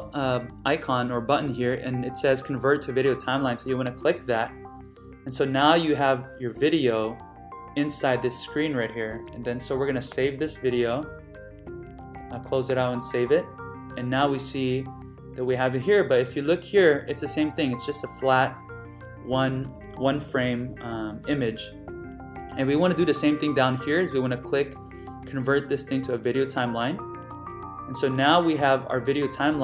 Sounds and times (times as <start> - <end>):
Speech: 0.0 - 4.5, 5.3 - 7.2, 7.8 - 11.1, 12.3 - 18.6, 19.3 - 21.7, 22.6 - 27.0, 27.9 - 29.6
Music: 0.0 - 29.6.